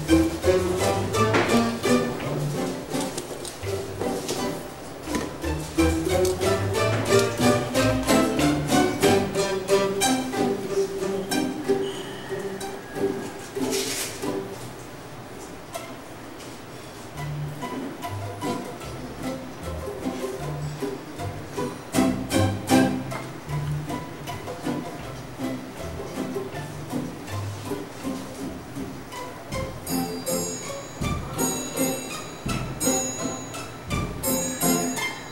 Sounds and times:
Pizzicato: 0.0s - 35.3s.

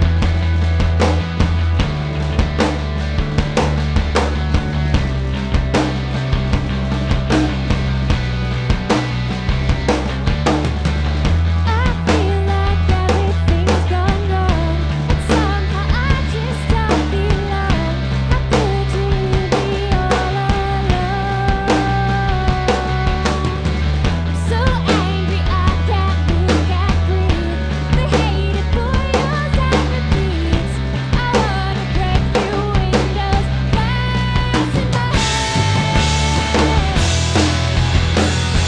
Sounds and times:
Music: 0.0s - 38.6s.

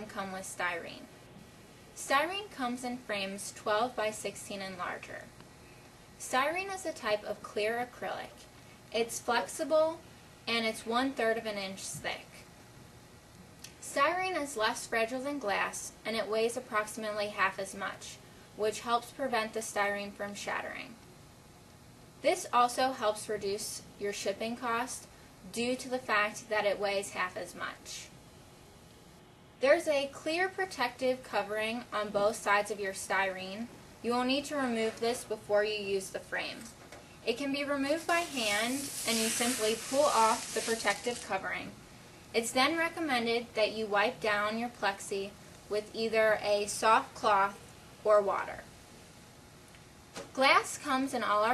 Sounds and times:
Speech: 0.0s - 1.1s, 2.0s - 5.3s, 6.2s - 12.4s, 13.8s - 21.0s, 22.2s - 28.1s, 29.6s - 36.7s, 37.3s - 41.8s, 42.4s - 48.7s, 50.4s - 51.5s.

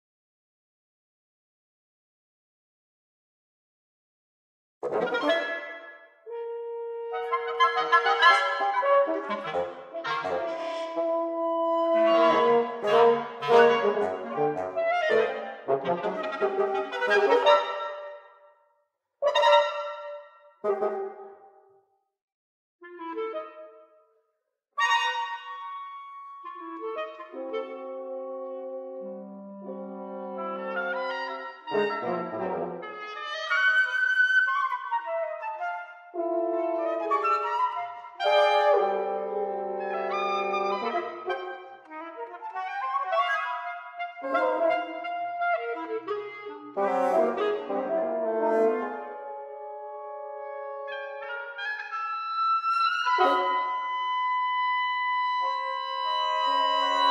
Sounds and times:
Orchestra: 4.8s - 18.4s, 19.2s - 21.4s, 24.8s - 57.1s
Wind instrument, woodwind instrument: 4.8s - 21.8s, 22.8s - 24.1s, 24.8s - 57.1s
Classical music: 4.9s - 18.4s, 24.9s - 57.1s.

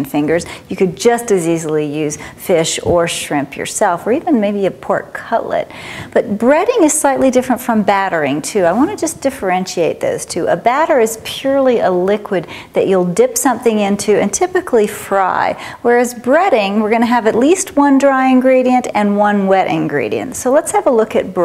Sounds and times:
Speech: 0.0s - 21.4s.

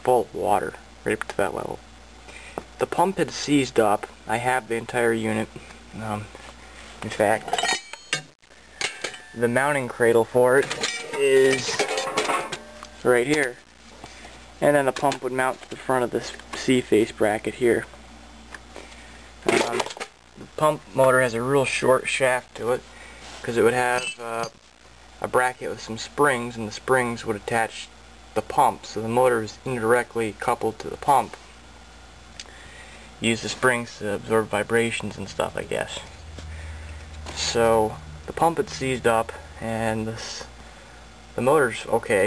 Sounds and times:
Speech: 0.0s - 1.8s, 2.8s - 6.3s, 7.0s - 7.6s, 9.4s - 12.2s, 13.0s - 13.6s, 14.6s - 17.9s, 19.4s - 22.8s, 23.4s - 24.6s, 25.2s - 31.4s, 33.2s - 36.2s, 37.3s - 40.5s, 41.4s - 42.2s.

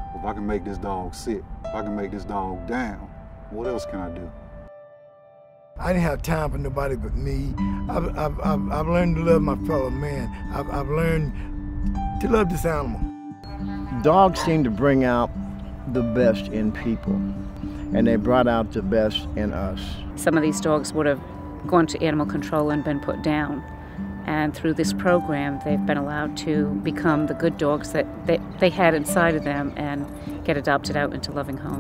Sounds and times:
Music: 0.0s - 31.8s
Bow-wow: 14.3s - 14.7s.

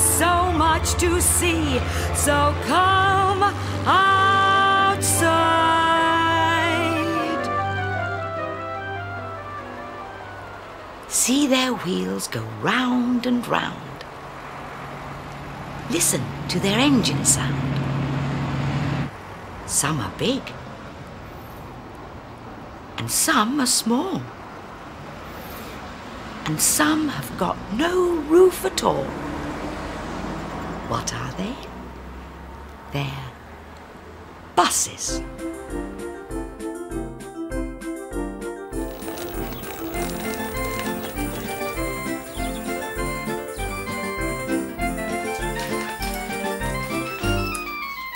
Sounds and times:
Speech: 11.1s - 14.0s, 15.9s - 17.7s, 19.7s - 20.6s, 23.0s - 24.3s, 26.4s - 29.2s, 30.9s - 31.7s, 32.9s - 33.4s, 34.6s - 35.2s.

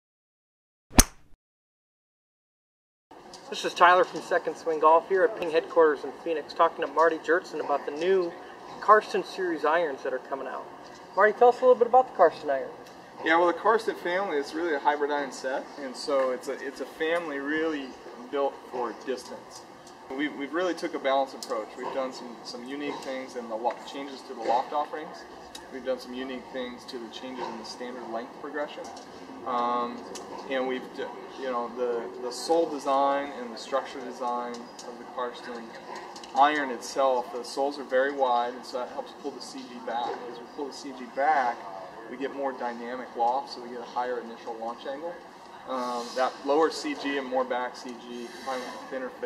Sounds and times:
Speech: 3.5s - 49.2s.

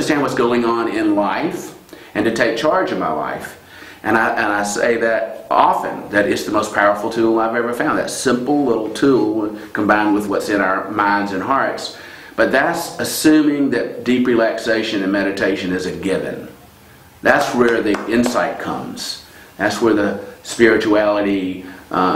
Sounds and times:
Speech: 0.0s - 16.6s, 17.2s - 22.1s.

